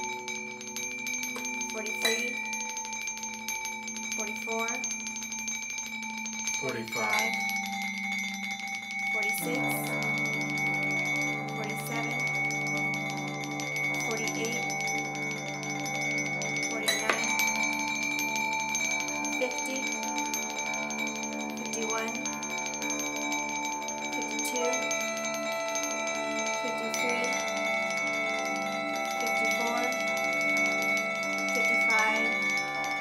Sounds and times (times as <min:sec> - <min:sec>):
Glockenspiel: 0:00.0 - 0:33.0
Marimba, xylophone: 0:00.0 - 0:33.0.